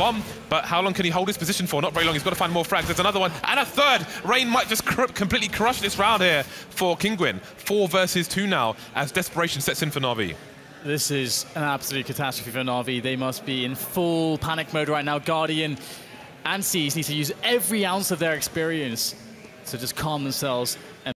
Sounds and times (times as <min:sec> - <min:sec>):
Speech: 0:00.0 - 0:21.1.